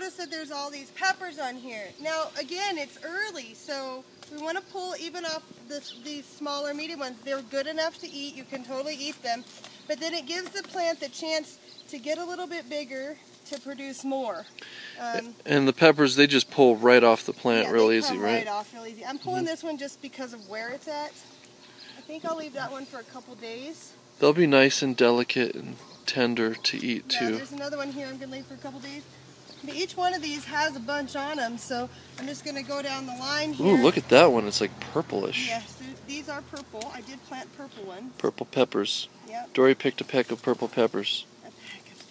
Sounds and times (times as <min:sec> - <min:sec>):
Speech: 0:15.0 - 0:19.9, 0:22.1 - 0:29.0.